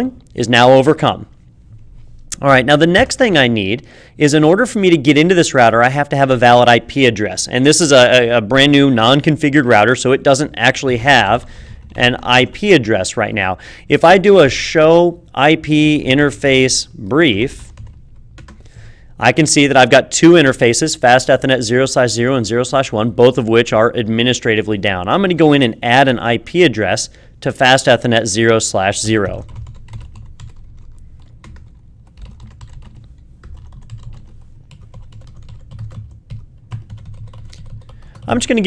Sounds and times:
Computer keyboard: 17.6 - 18.7, 29.4 - 38.4.

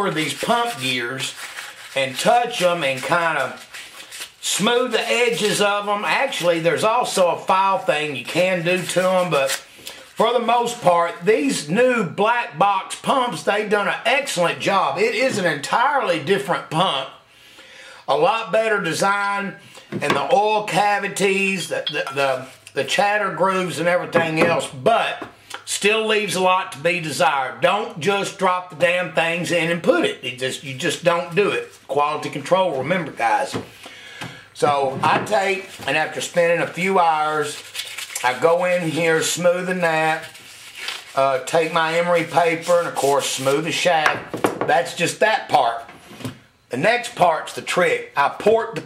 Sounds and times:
Speech: 0.0 - 1.4, 2.0 - 3.7, 4.4 - 9.6, 10.2 - 17.2, 18.1 - 33.7, 34.6 - 40.4, 41.1 - 45.9, 46.7 - 48.8.

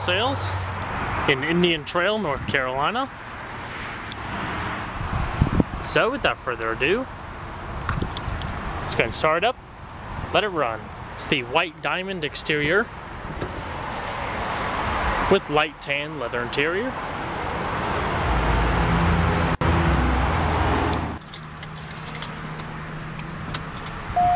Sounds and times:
Speech: 0.0 - 0.6, 1.3 - 3.1, 5.8 - 7.1, 8.9 - 9.6, 10.3 - 12.9, 15.3 - 17.0
Vehicle: 0.0 - 24.3.

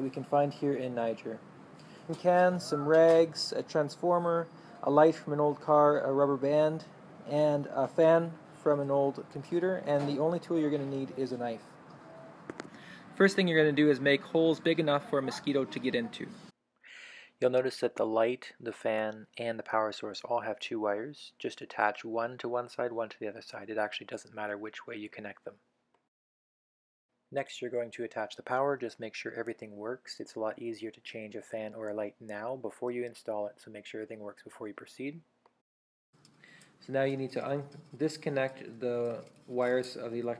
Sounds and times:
Speech: 0.0 - 1.4, 2.1 - 11.7, 13.2 - 16.4, 17.4 - 25.5, 27.4 - 35.2, 36.9 - 40.4.

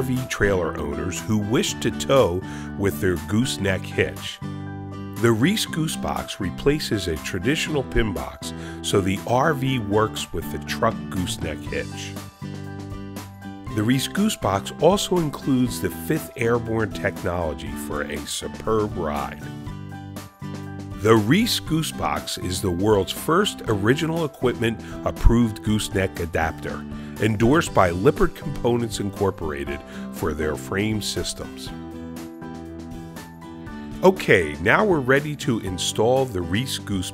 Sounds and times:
Speech: 0.0 - 4.4, 5.2 - 12.2, 13.7 - 19.5, 21.0 - 31.8, 34.0 - 37.1
Music: 0.0 - 37.1.

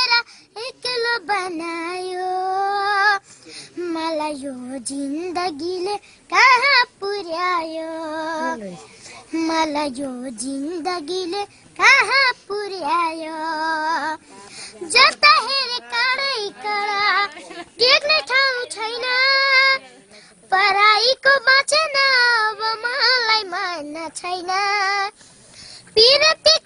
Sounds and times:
Child singing: 0.0 - 3.2, 3.8 - 14.2, 14.8 - 25.1, 26.0 - 26.6.

